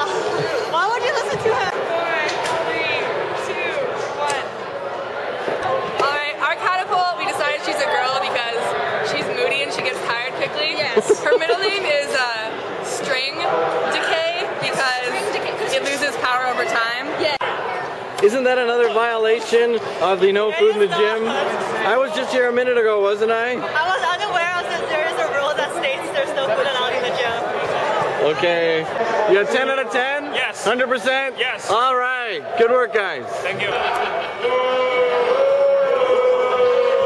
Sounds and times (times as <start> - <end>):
Inside, public space: 0.0 - 37.0.